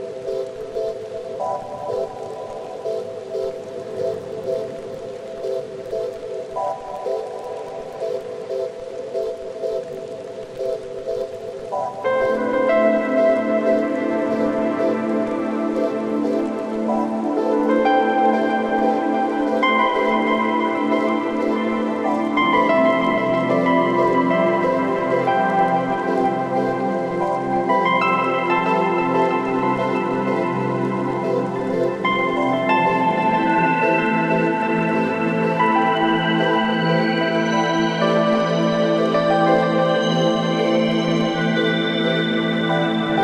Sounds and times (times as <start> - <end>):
Music: 0.0 - 43.2
Rain on surface: 0.0 - 43.2.